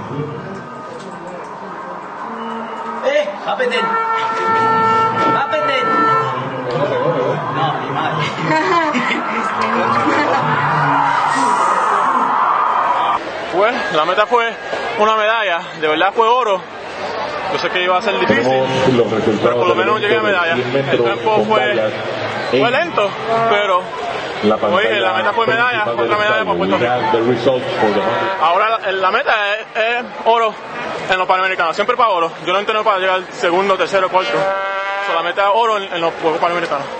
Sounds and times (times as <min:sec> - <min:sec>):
Outside, urban or manmade: 0:00.0 - 0:36.9.